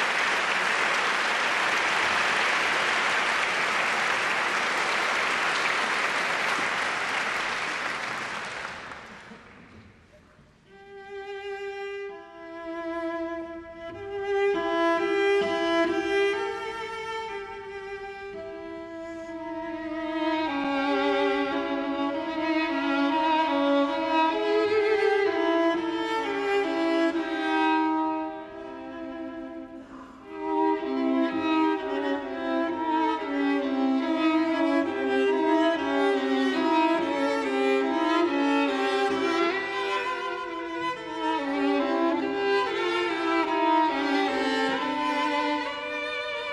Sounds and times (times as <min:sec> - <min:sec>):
Cello: 0:00.0 - 0:46.5
Violin, fiddle: 0:10.7 - 0:46.5.